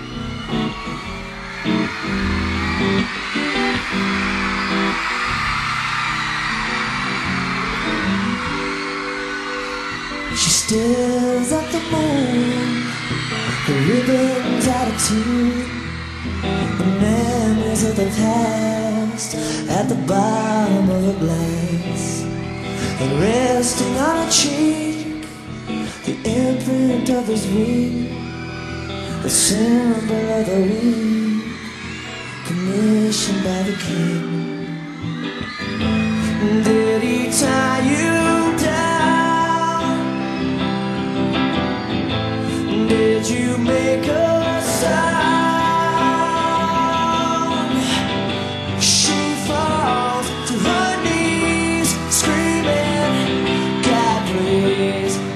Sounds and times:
Music: 0.0 - 55.3.

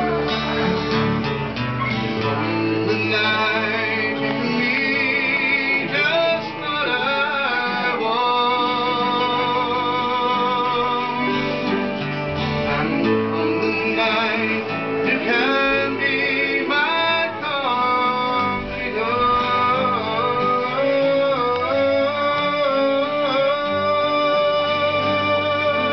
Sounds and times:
Music: 0.0 - 25.9
Male singing: 2.3 - 11.8, 12.6 - 25.9.

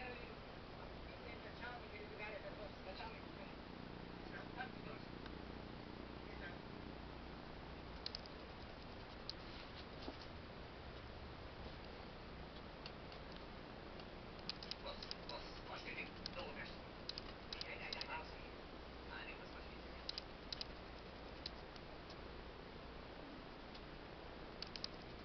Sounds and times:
Speech: 0.0 - 3.6, 14.8 - 16.9, 17.6 - 20.1.

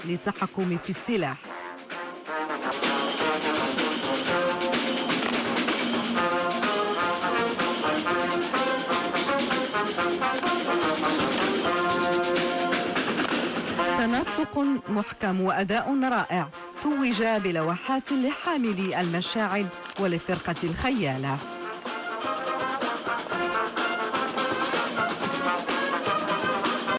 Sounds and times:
Speech: 0.0 - 1.4, 13.9 - 21.4
Music: 0.0 - 26.9.

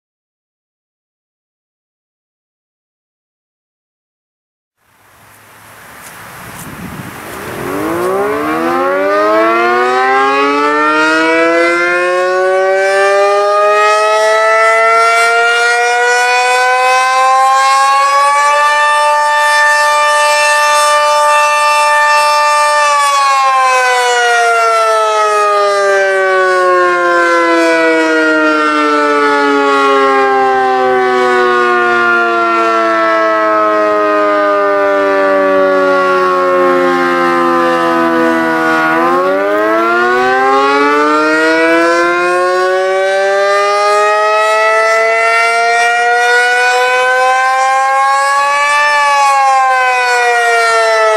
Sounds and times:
Civil defense siren: 6.8 - 51.1.

